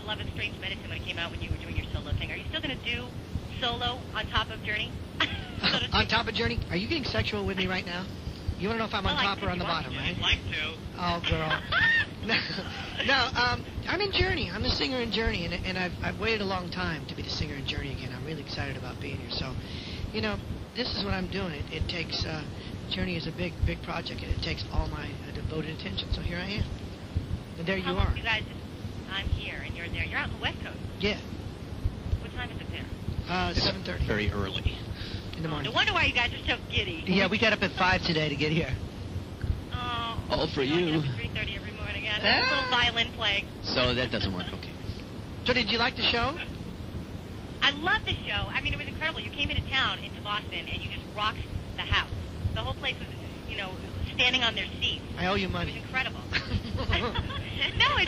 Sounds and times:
Speech: 0.0s - 26.7s, 27.6s - 31.2s, 32.2s - 34.8s, 35.4s - 38.8s, 39.8s - 44.9s, 45.5s - 46.5s, 47.6s - 58.0s.

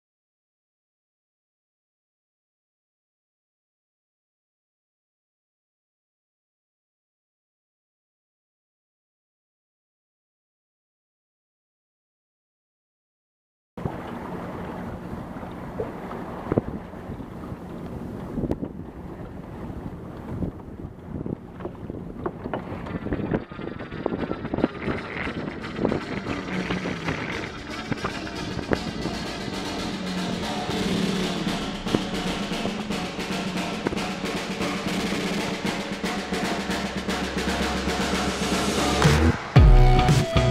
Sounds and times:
Timpani: 25.0s - 40.5s.

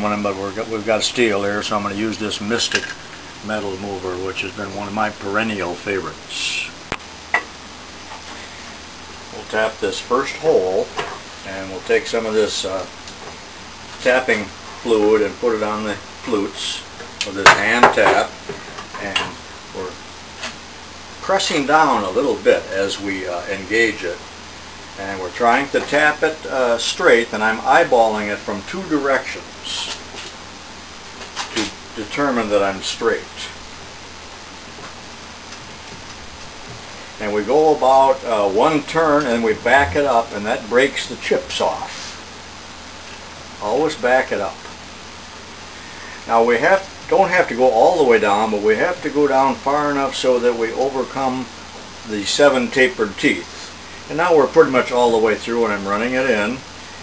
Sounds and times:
Speech: 0.0s - 6.8s, 9.3s - 13.0s, 14.0s - 18.4s, 19.0s - 20.0s, 21.2s - 24.2s, 25.0s - 30.0s, 31.5s - 33.6s, 37.2s - 42.2s, 43.6s - 44.7s, 46.3s - 51.5s, 52.1s - 56.7s.

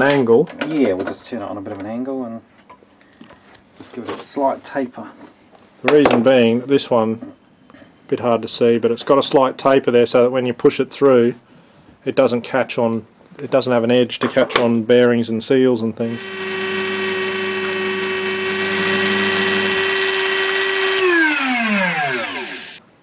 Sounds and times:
Speech: 0.0s - 2.5s, 3.8s - 7.4s, 8.1s - 11.4s, 12.0s - 16.2s
Inside, small room: 0.0s - 23.0s.

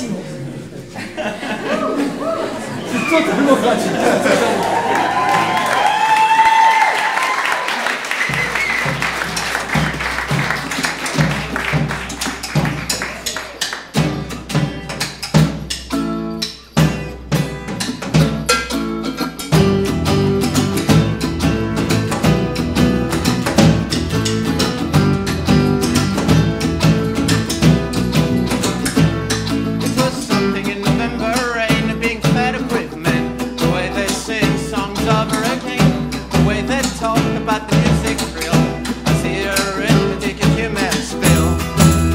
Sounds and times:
Clapping: 4.5s - 15.2s
Music: 8.0s - 42.1s.

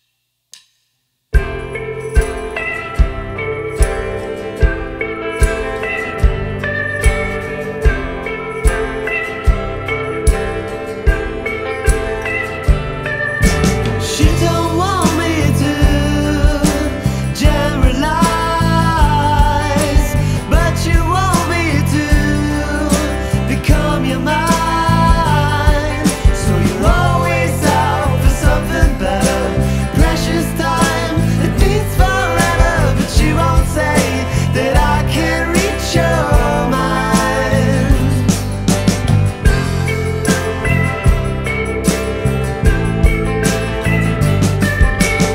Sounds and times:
Music: 1.3s - 45.3s.

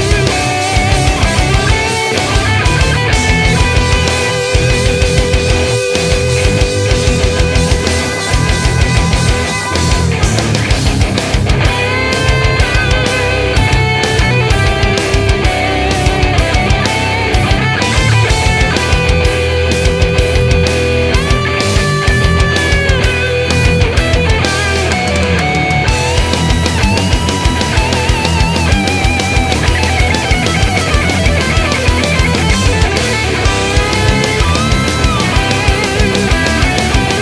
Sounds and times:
Progressive rock: 0.0s - 37.2s.

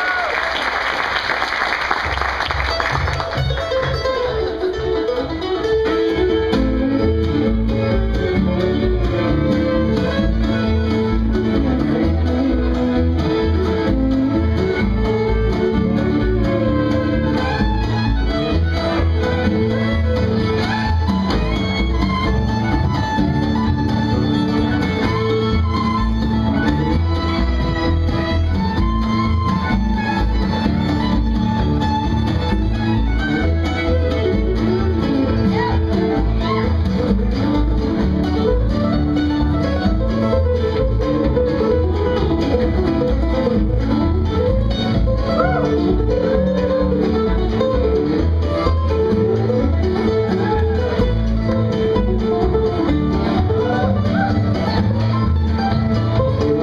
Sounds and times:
Country: 2.0s - 56.6s.

